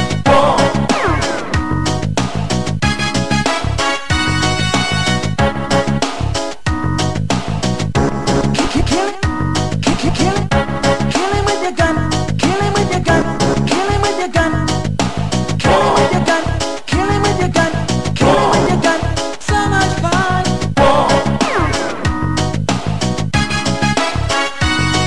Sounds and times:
Music: 0.0 - 25.0.

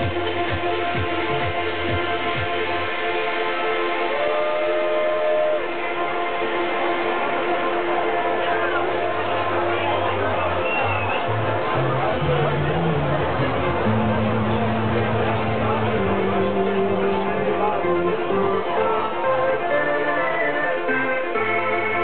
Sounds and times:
Crowd: 0.0 - 22.0.

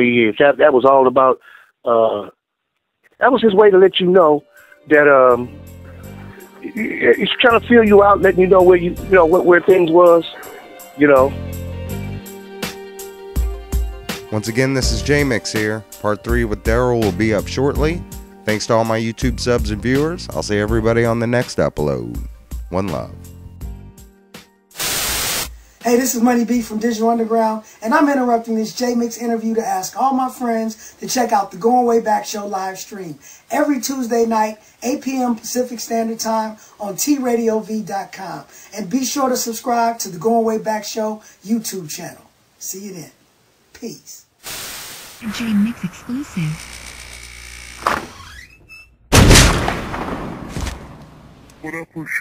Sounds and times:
Speech: 0.0 - 2.4, 3.2 - 5.5, 6.7 - 11.4, 14.3 - 23.2, 25.8 - 43.2, 43.8 - 44.3, 45.2 - 46.6, 51.6 - 52.2
Gunshot, gunfire: 49.1 - 51.3.

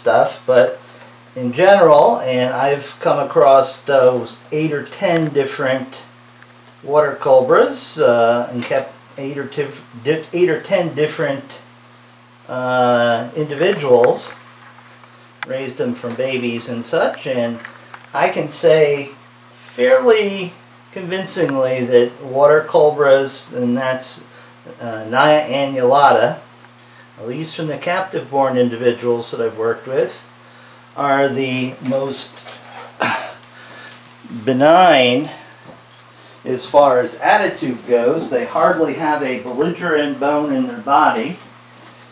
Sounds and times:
Speech: 0.0 - 0.8, 1.4 - 6.2, 6.8 - 11.7, 12.5 - 14.4, 15.4 - 26.5, 27.2 - 30.3, 31.0 - 33.4, 34.3 - 35.5, 36.4 - 41.5.

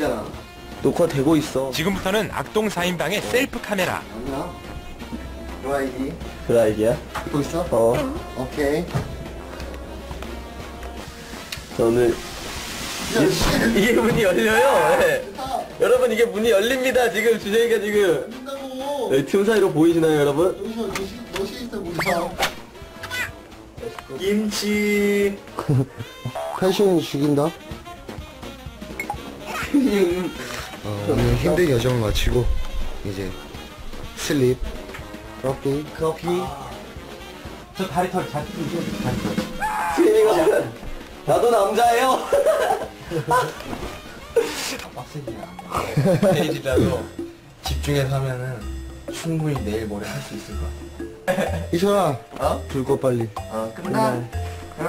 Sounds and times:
Music: 0.0 - 54.8.

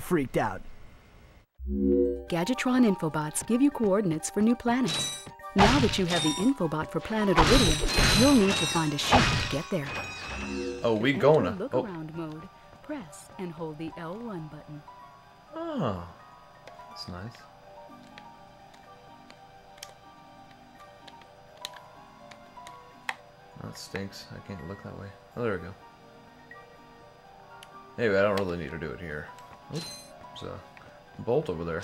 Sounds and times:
Music: 1.6 - 31.8.

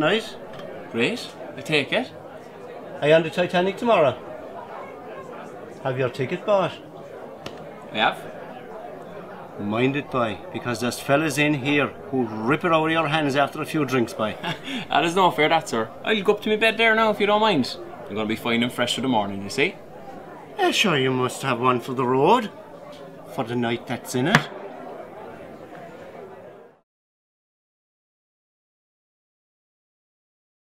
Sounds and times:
Speech: 0.0 - 26.7.

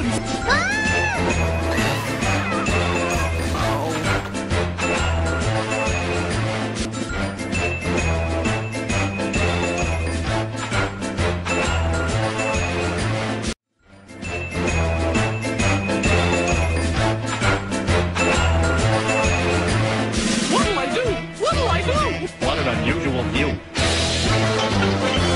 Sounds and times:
Music: 0.0 - 25.3
Speech: 3.1 - 4.2, 20.5 - 23.6.

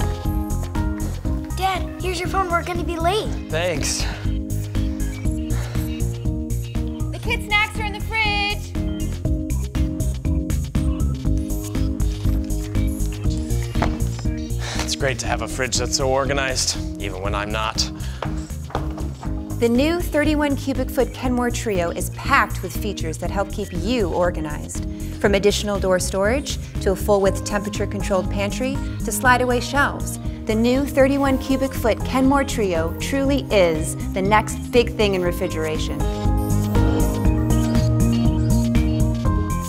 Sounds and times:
Music: 0.0 - 39.6.

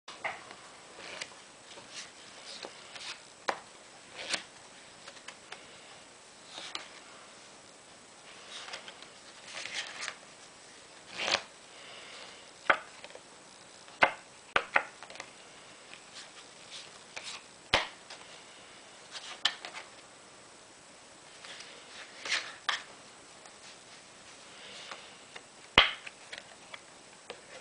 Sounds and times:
Inside, small room: 0.1 - 27.6.

